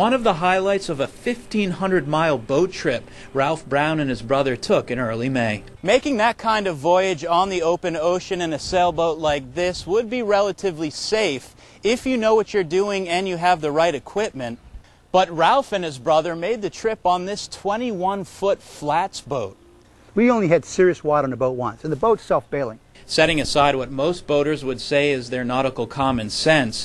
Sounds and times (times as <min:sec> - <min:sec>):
Speech: 0:00.0 - 0:14.6, 0:15.2 - 0:19.6, 0:20.2 - 0:26.8.